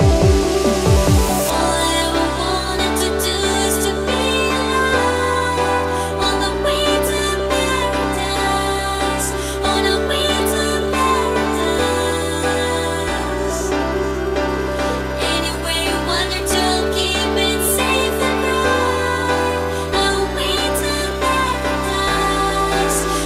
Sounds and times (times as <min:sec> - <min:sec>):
Music: 0:00.0 - 0:23.2.